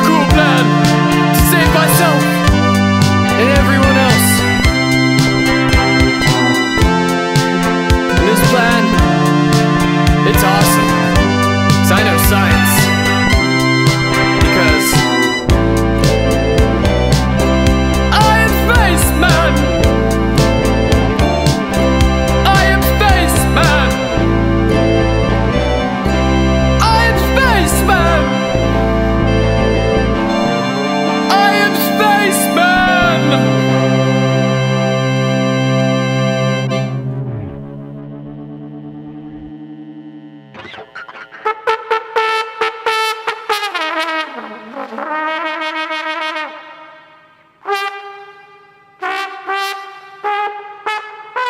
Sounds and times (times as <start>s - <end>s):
Trombone: 0.0s - 38.2s, 40.5s - 51.5s.